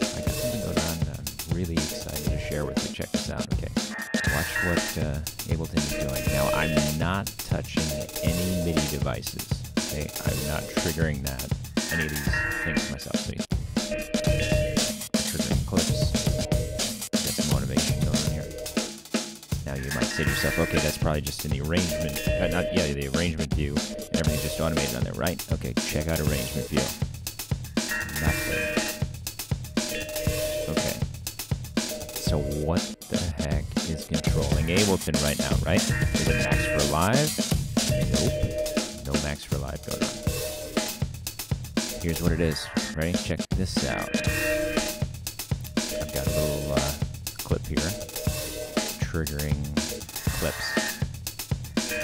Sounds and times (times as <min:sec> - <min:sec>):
Music: 0:00.0 - 0:52.0
Speech: 0:00.1 - 0:13.5, 0:14.3 - 0:16.3, 0:17.2 - 0:18.6, 0:19.7 - 0:27.0, 0:28.1 - 0:28.8, 0:30.6 - 0:31.0, 0:32.2 - 0:37.4, 0:38.0 - 0:40.2, 0:42.0 - 0:44.3, 0:45.9 - 0:48.0, 0:49.0 - 0:50.9.